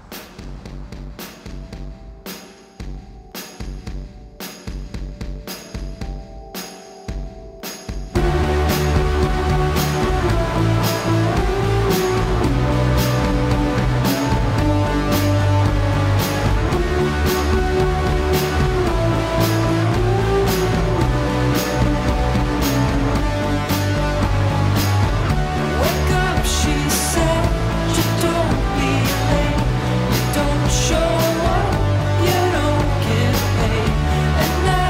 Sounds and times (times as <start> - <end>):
Soundtrack music: 0.0 - 34.8.